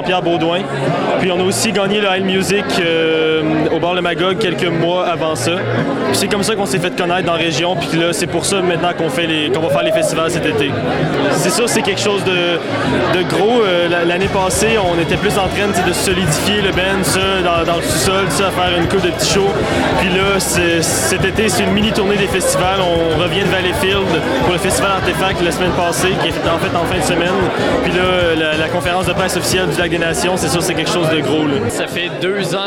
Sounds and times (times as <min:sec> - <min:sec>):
Speech: 0:00.0 - 0:32.6.